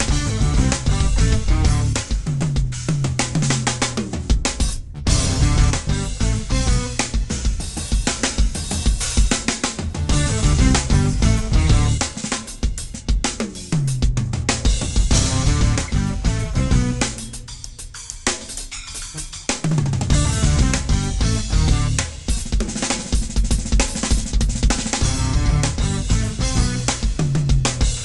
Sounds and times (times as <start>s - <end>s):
Drum: 0.0s - 28.0s
Drum kit: 0.0s - 28.0s
Rock music: 0.0s - 28.0s.